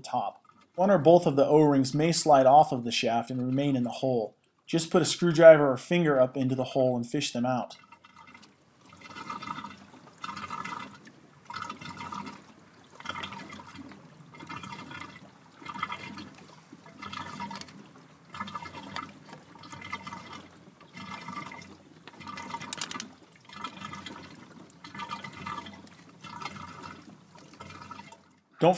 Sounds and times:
Liquid: 0:00.0 - 0:28.7.

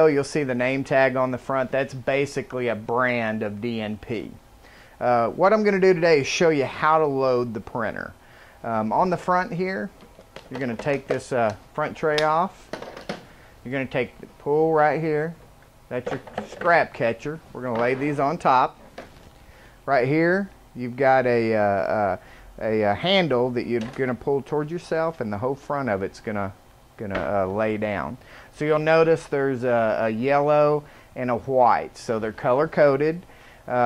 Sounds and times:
Speech: 0:00.0 - 0:04.4, 0:05.0 - 0:12.6, 0:13.6 - 0:18.8, 0:19.9 - 0:33.8.

